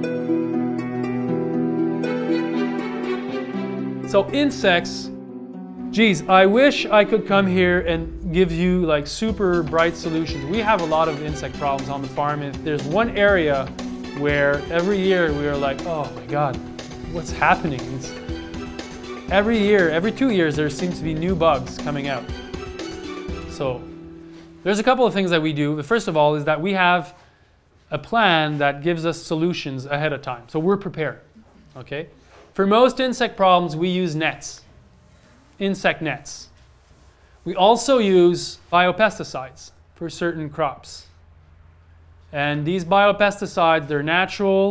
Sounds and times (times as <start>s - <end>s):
Music: 0.0s - 26.2s
Speech: 4.1s - 5.1s, 6.0s - 18.2s, 19.3s - 22.3s, 23.5s - 23.9s, 24.7s - 27.2s, 27.9s - 34.7s, 35.6s - 36.5s, 37.4s - 41.2s, 42.3s - 44.7s.